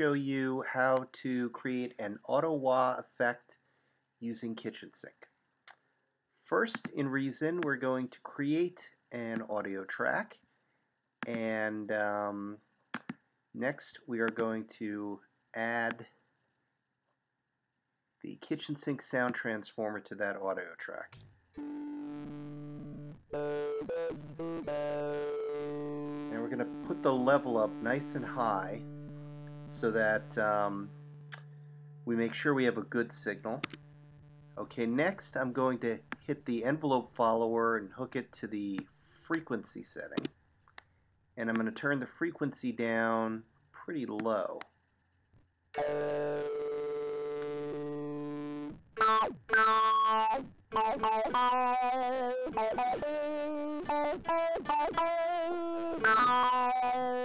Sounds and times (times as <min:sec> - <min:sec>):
Speech: 0:00.0 - 0:03.5, 0:04.2 - 0:05.3, 0:06.5 - 0:10.4, 0:11.2 - 0:12.6, 0:13.6 - 0:16.1, 0:18.3 - 0:21.2, 0:26.3 - 0:28.8, 0:29.8 - 0:30.9, 0:32.1 - 0:33.7, 0:34.6 - 0:40.3, 0:41.4 - 0:44.6
Music: 0:21.6 - 0:36.3, 0:45.8 - 0:57.2.